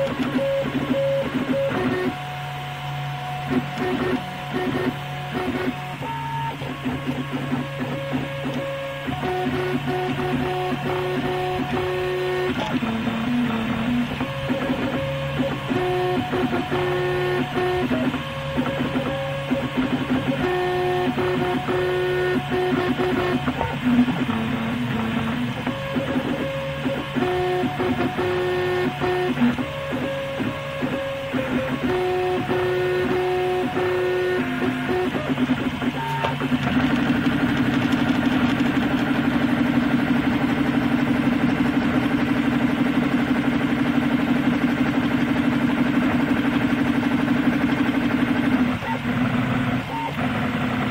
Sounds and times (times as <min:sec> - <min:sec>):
Printer: 0:00.0 - 0:50.9.